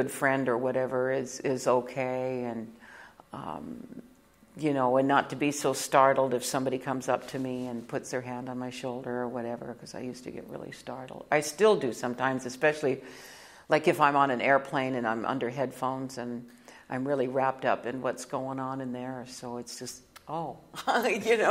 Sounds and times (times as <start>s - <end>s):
Speech: 4.6s - 13.0s, 13.7s - 21.5s.